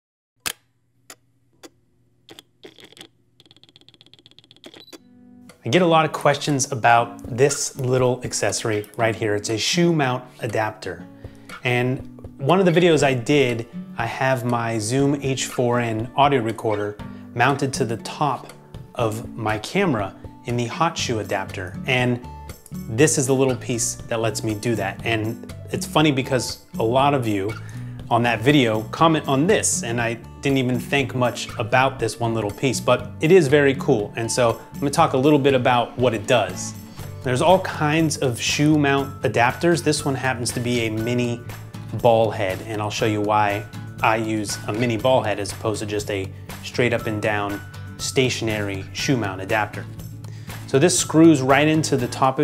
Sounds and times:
Music: 5.0s - 52.4s
Speech: 5.6s - 11.0s, 11.6s - 22.2s, 22.9s - 41.4s, 42.0s - 49.9s, 50.7s - 52.4s.

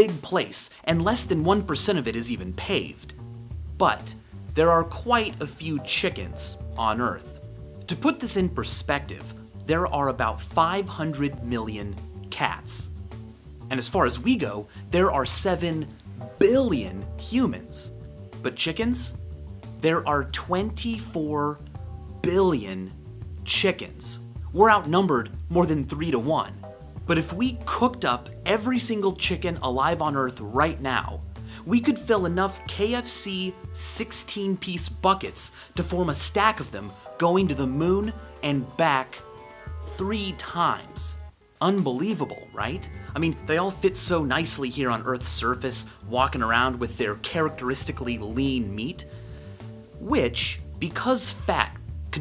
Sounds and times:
Speech: 0.0s - 3.2s, 3.8s - 13.0s, 13.7s - 19.2s, 19.8s - 21.6s, 22.2s - 39.3s, 39.9s - 49.1s, 50.0s - 52.2s.

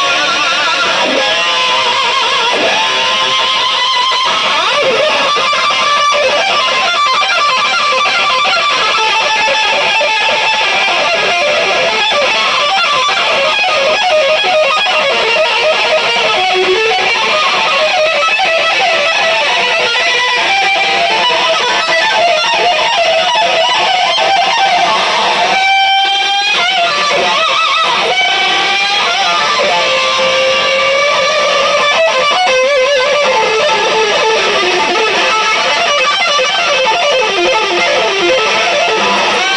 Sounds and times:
Bass guitar: 0.0s - 39.5s
Electric guitar: 0.0s - 39.5s.

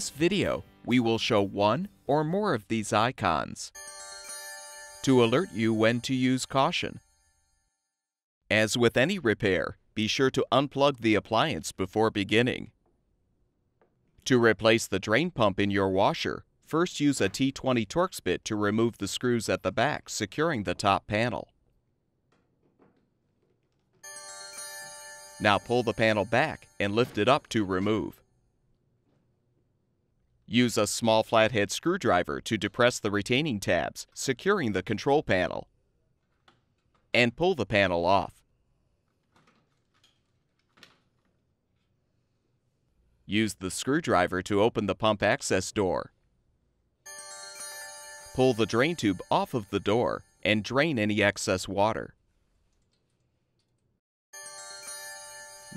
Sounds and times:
Music: 0.0s - 2.4s, 3.8s - 6.2s, 24.1s - 27.2s, 47.1s - 50.5s, 54.4s - 55.7s
Speech: 0.0s - 3.8s, 5.0s - 7.0s, 8.5s - 12.8s, 14.2s - 21.5s, 25.4s - 28.2s, 30.5s - 35.7s, 37.2s - 38.4s, 43.3s - 46.1s, 48.4s - 52.2s.

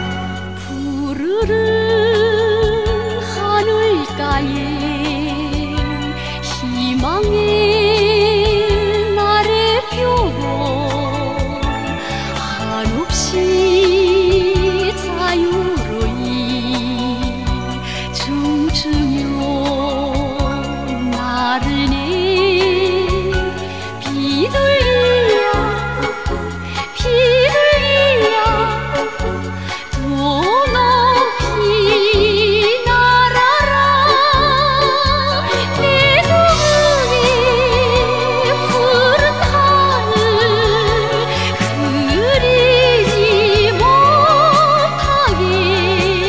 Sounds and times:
Music: 0.0s - 46.2s.

